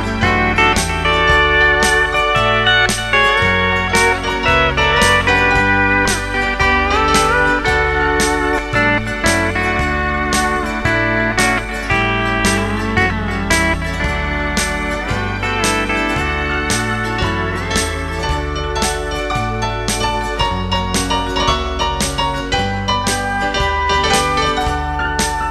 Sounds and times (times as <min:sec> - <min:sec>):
Steel guitar, slide guitar: 0:00.0 - 0:25.5.